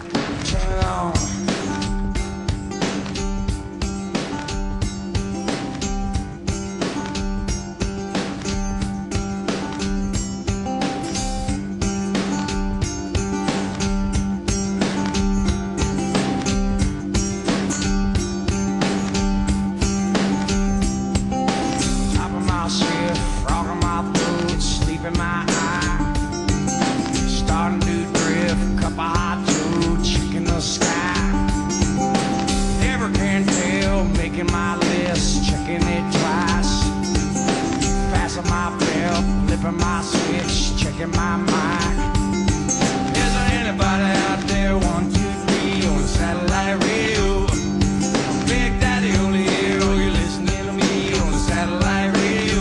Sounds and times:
Music: 0:00.0 - 0:52.6.

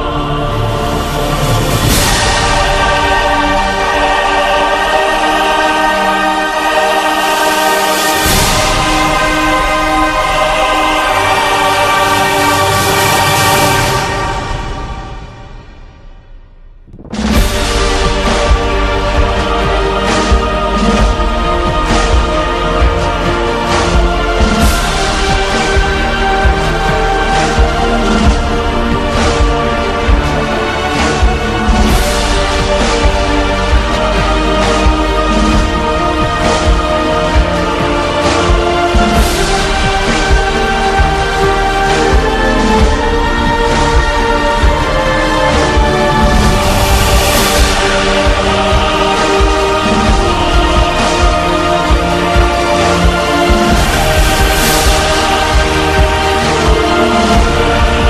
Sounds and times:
New-age music: 0:00.0 - 0:58.0.

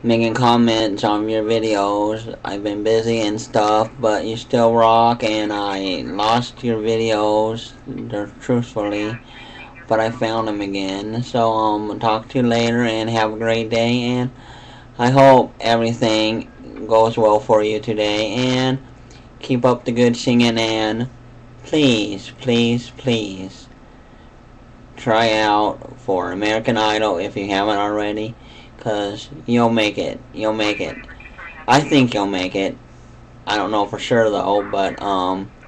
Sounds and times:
Speech: 0:00.0 - 0:14.4, 0:15.0 - 0:23.7, 0:25.0 - 0:32.8, 0:33.5 - 0:35.6.

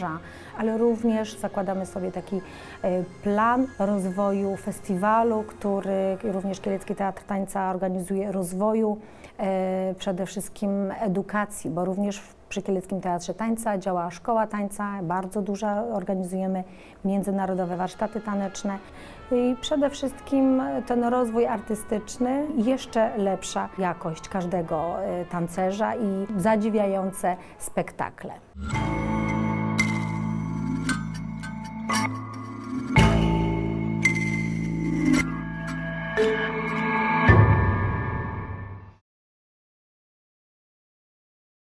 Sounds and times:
Speech: 0:00.0 - 0:28.6
Dance music: 0:32.0 - 0:38.5.

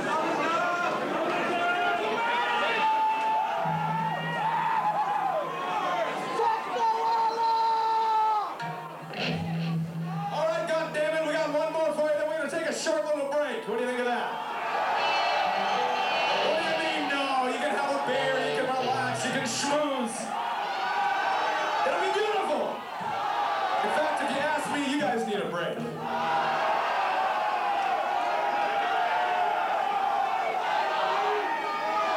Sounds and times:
Speech: 0:10.3 - 0:14.3, 0:16.4 - 0:20.3, 0:21.8 - 0:22.8, 0:23.8 - 0:25.8.

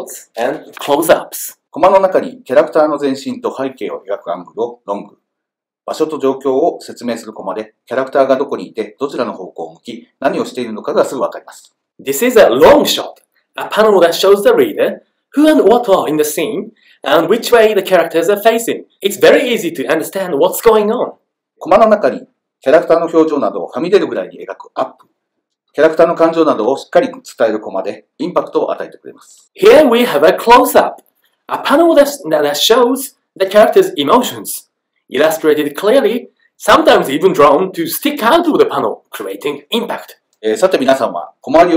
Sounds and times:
Speech: 0:00.0 - 0:05.2, 0:05.9 - 0:25.0, 0:25.8 - 0:41.7.

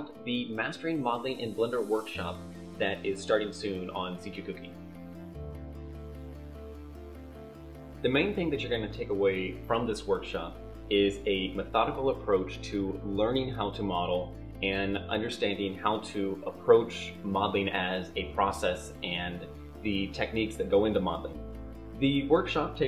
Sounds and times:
Speech: 0:00.0 - 0:04.8, 0:08.0 - 0:21.4, 0:22.0 - 0:22.8
Music: 0:00.0 - 0:22.8.

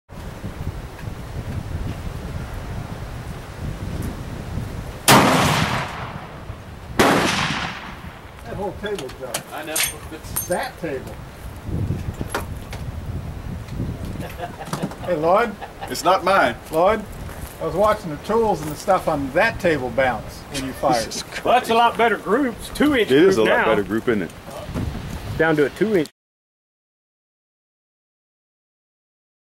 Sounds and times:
Speech: 0:08.4 - 0:11.2, 0:15.0 - 0:24.8, 0:25.4 - 0:26.1.

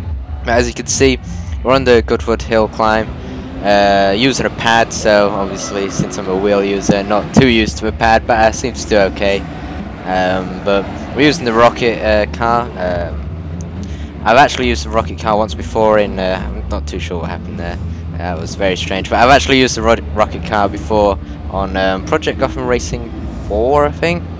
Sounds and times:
Car: 0:00.0 - 0:24.3
Speech: 0:00.4 - 0:09.4, 0:10.1 - 0:13.2, 0:14.2 - 0:24.3.

